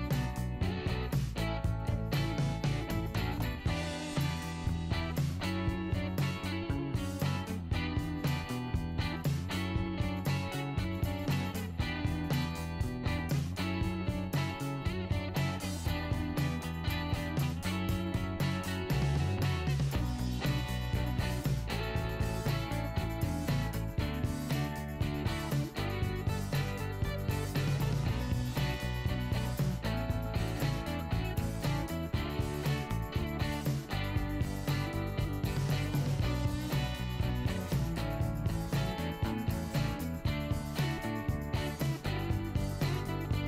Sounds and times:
Music: 0:00.0 - 0:43.4.

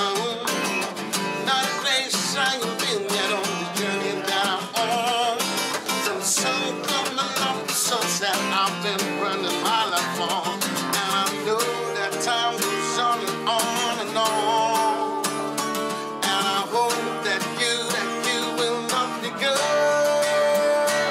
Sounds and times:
Music: 0:00.0 - 0:21.1.

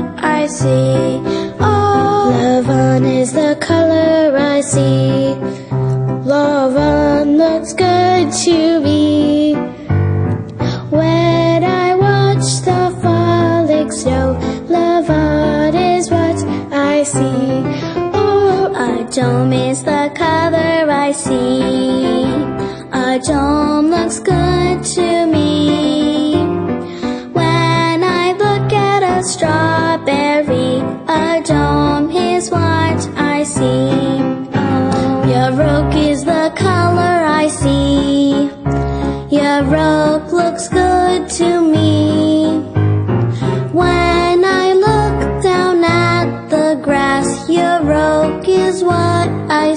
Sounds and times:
Jingle (music): 0:00.0 - 0:49.7.

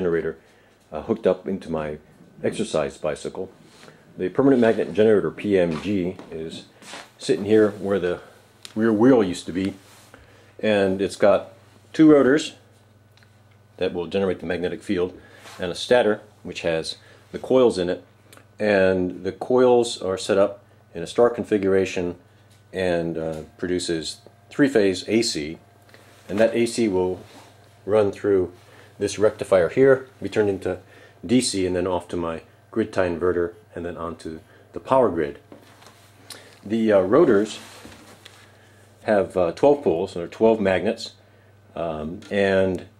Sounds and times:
Speech: 0:00.0 - 0:03.6, 0:04.2 - 0:09.8, 0:10.6 - 0:12.7, 0:13.8 - 0:25.6, 0:26.3 - 0:35.5, 0:36.6 - 0:37.7, 0:39.0 - 0:42.9.

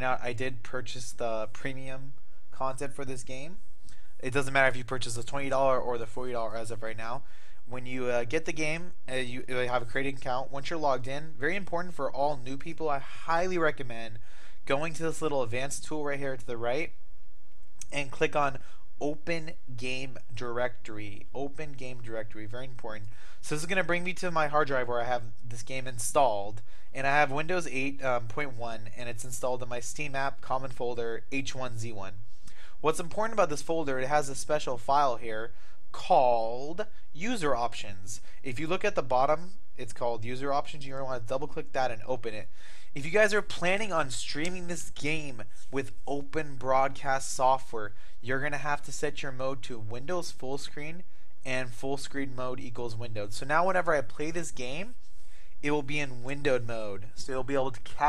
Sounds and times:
Speech: 0:00.0 - 0:03.6, 0:04.2 - 0:17.0, 0:17.8 - 0:32.2, 0:32.8 - 0:55.0, 0:55.6 - 0:58.0.

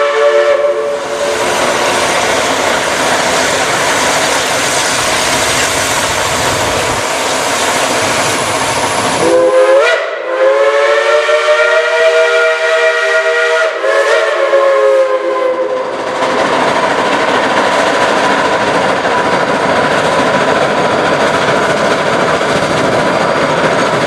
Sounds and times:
Train whistle: 0:00.0 - 0:01.8, 0:09.2 - 0:16.0
Railroad car, train wagon: 0:00.0 - 0:24.0
Clickety-clack: 0:01.2 - 0:09.4, 0:15.4 - 0:24.0.

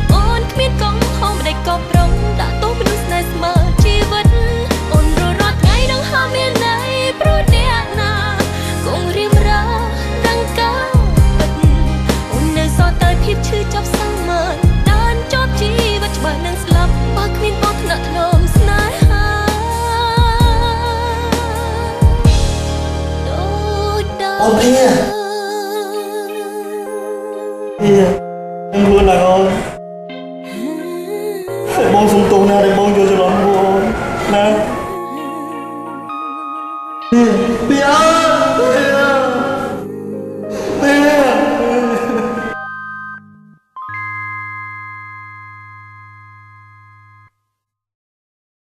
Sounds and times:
Music: 0:00.0 - 0:47.7
Speech: 0:24.3 - 0:25.2, 0:27.8 - 0:28.2, 0:28.8 - 0:29.6, 0:31.6 - 0:34.7, 0:37.1 - 0:39.6, 0:40.8 - 0:42.4.

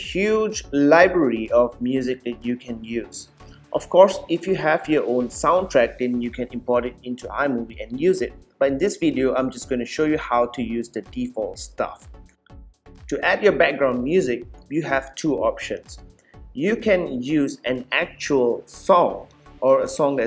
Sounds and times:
Speech: 0:00.0 - 0:12.1, 0:13.1 - 0:16.0, 0:16.6 - 0:20.2
Music: 0:00.0 - 0:20.2.

